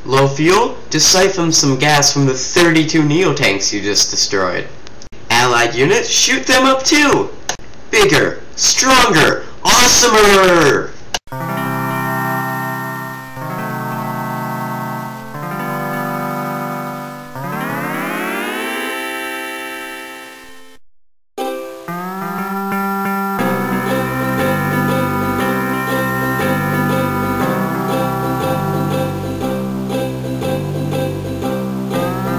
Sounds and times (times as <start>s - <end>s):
Speech: 0.0s - 4.7s, 5.3s - 10.9s
Music: 11.3s - 20.8s, 21.4s - 32.3s.